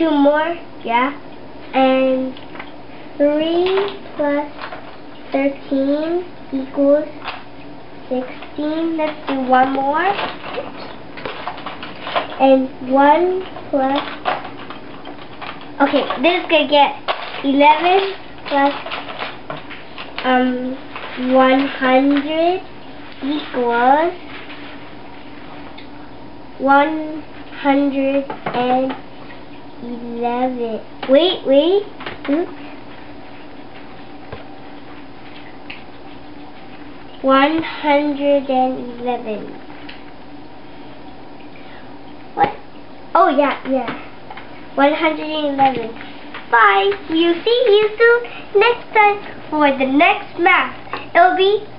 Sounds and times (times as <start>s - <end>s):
Child speech, kid speaking: 0.0s - 2.4s, 3.2s - 4.6s, 5.3s - 7.2s, 8.1s - 10.9s, 12.4s - 14.2s, 15.8s - 18.9s, 20.2s - 24.2s, 26.6s - 29.0s, 29.8s - 32.6s, 37.2s - 39.6s, 42.4s - 42.6s, 43.2s - 44.0s, 44.8s - 51.7s
Inside, small room: 0.0s - 51.7s.